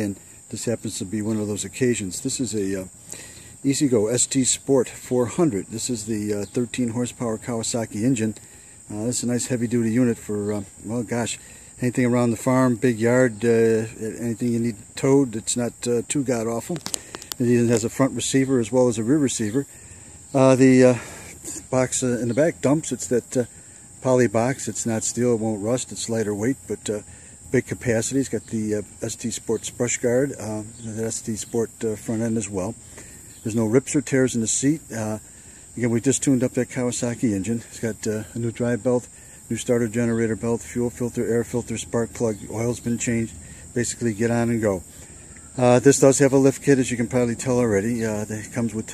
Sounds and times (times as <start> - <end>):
Speech: 0.0 - 3.0, 3.6 - 32.8, 33.4 - 44.9, 45.6 - 48.9.